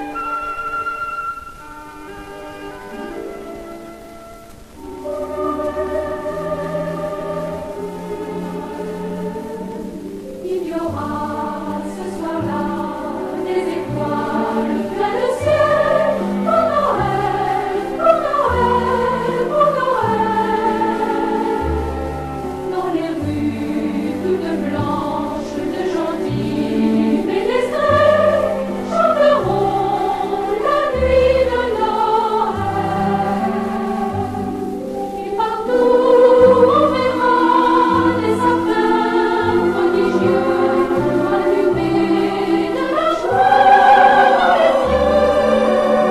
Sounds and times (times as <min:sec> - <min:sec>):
Music: 0:00.0 - 0:46.1.